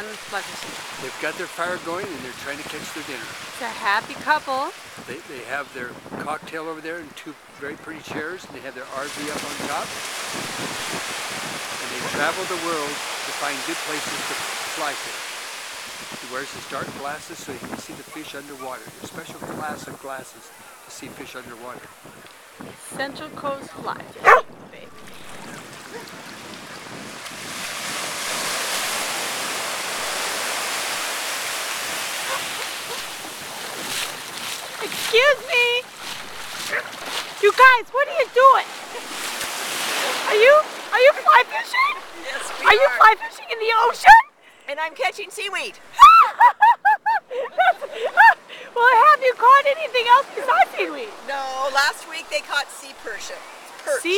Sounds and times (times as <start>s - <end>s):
Waves, surf: 0.0s - 54.1s
Wind noise (microphone): 0.6s - 14.7s, 16.0s - 20.2s, 21.0s - 30.2s.